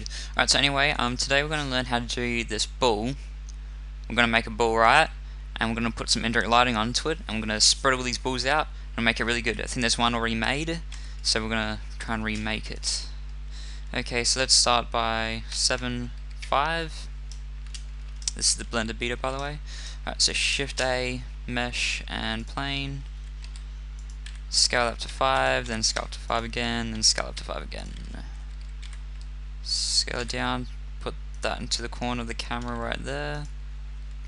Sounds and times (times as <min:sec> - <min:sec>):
Speech: 0:00.0 - 0:03.2, 0:04.1 - 0:13.2, 0:13.9 - 0:17.1, 0:18.3 - 0:23.1, 0:24.5 - 0:28.4, 0:29.6 - 0:33.5.